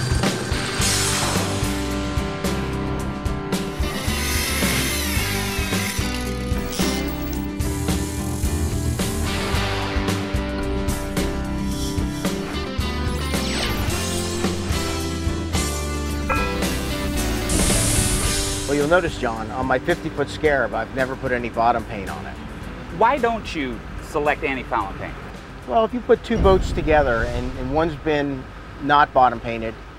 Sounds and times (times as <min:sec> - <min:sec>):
Music: 0:00.0 - 0:27.8
Speech: 0:18.7 - 0:29.8.